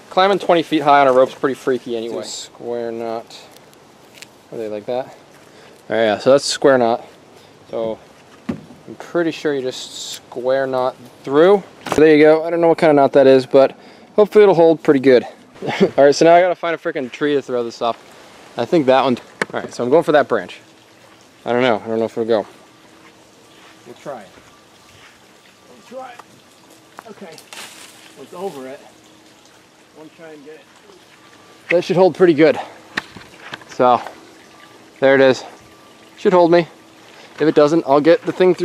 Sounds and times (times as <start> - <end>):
Trickle, dribble: 0.0 - 8.0, 8.8 - 38.6
Outside, rural or natural: 0.0 - 38.6
Speech: 0.1 - 3.5, 4.5 - 5.2, 8.9 - 18.0, 21.4 - 22.5, 23.8 - 24.4, 27.0 - 27.4, 28.2 - 28.9, 30.0 - 31.0, 31.7 - 32.7, 35.0 - 35.5, 36.2 - 36.8, 37.4 - 38.6.